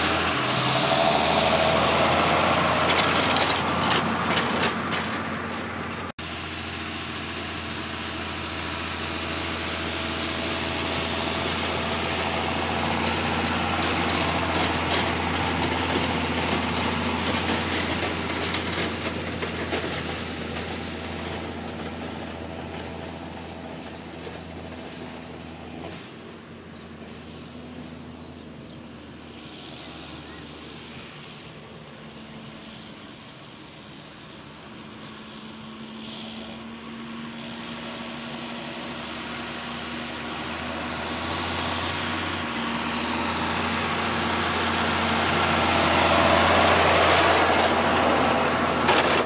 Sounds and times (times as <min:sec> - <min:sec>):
Vehicle: 0:00.0 - 0:49.2.